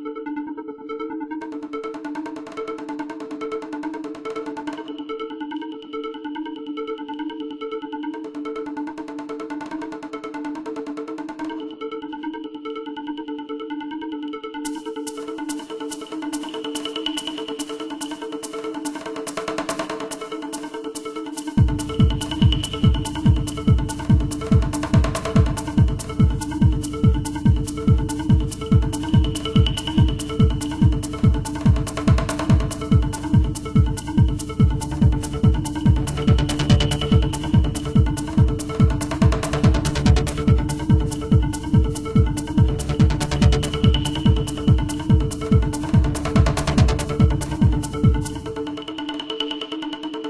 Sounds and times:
Music: 0:00.0 - 0:50.2.

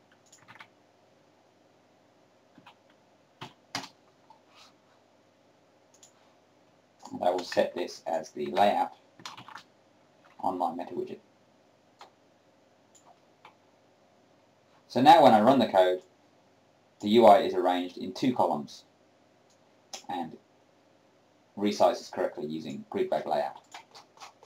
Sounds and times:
Inside, small room: 0:00.0 - 0:24.4
Clicking: 0:00.1 - 0:00.5, 0:05.9 - 0:06.2
Speech: 0:07.0 - 0:09.0, 0:10.4 - 0:11.3, 0:14.9 - 0:16.1, 0:17.0 - 0:18.9, 0:20.0 - 0:20.4, 0:21.6 - 0:23.6.

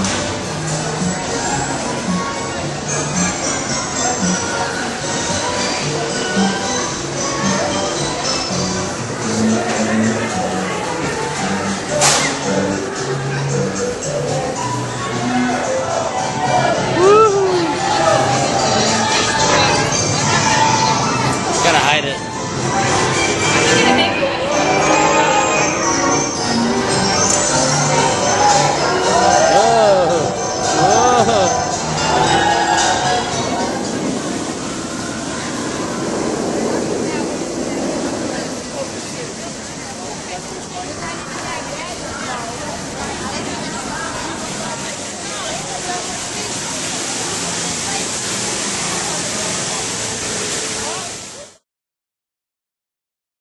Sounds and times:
Outside, urban or manmade: 0:00.0 - 0:51.6
Speech: 0:37.1 - 0:51.6
Slosh: 0:44.6 - 0:51.6.

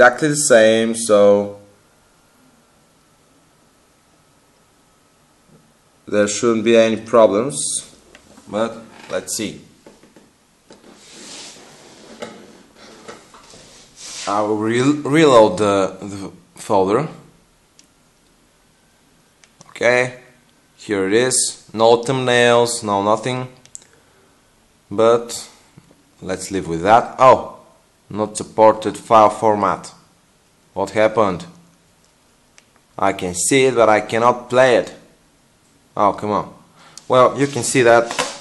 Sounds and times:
Speech: 0:00.0 - 0:01.7, 0:06.0 - 0:09.8, 0:14.2 - 0:17.3, 0:19.6 - 0:23.6, 0:24.9 - 0:25.6, 0:26.2 - 0:30.0, 0:30.7 - 0:31.6, 0:33.0 - 0:35.2, 0:36.0 - 0:38.4
Inside, small room: 0:00.0 - 0:38.4.

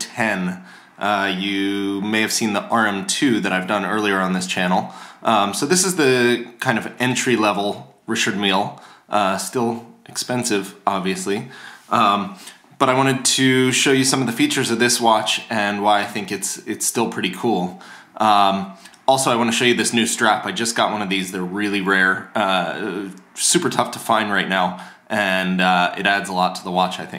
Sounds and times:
Speech: 0:00.0 - 0:27.1.

